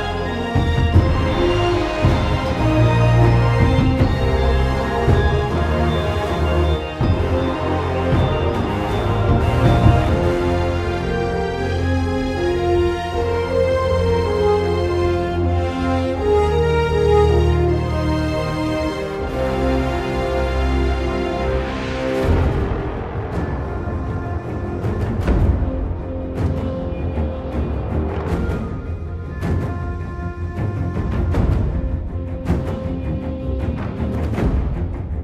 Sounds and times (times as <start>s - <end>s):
Tender music: 0.0s - 35.2s.